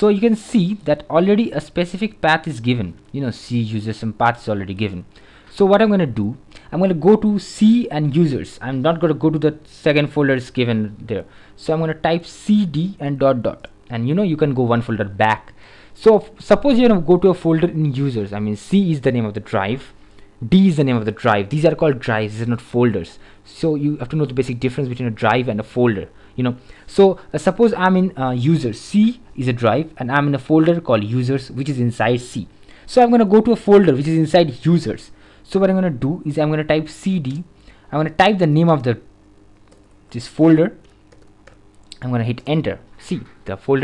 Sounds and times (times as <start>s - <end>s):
Speech: 0.0s - 39.1s, 40.1s - 40.8s, 41.9s - 43.8s.